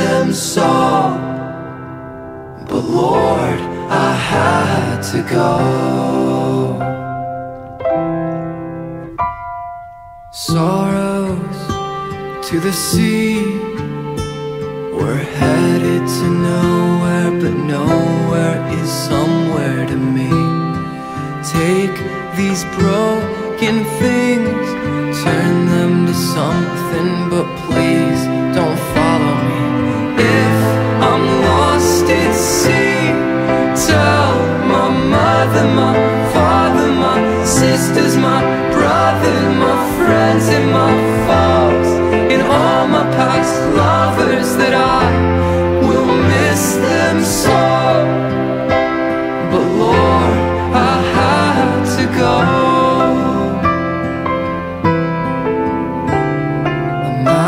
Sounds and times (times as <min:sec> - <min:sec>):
Music: 0:00.0 - 0:57.4.